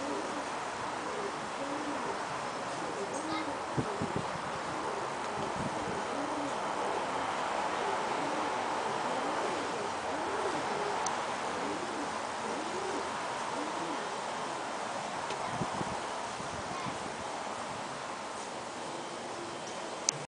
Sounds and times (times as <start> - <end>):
Outside, rural or natural: 0.0 - 20.2.